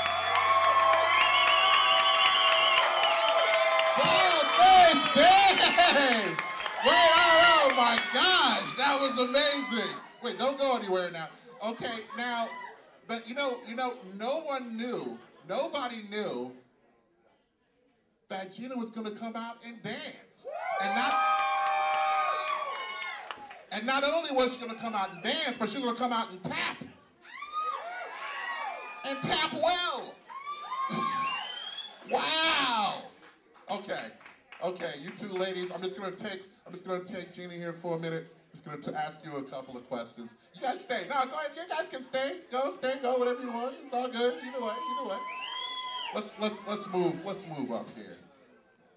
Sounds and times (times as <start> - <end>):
Cheering: 0.0 - 11.1, 11.8 - 12.9, 20.4 - 23.8, 27.2 - 33.2, 42.9 - 47.4
Crowd: 0.0 - 48.9.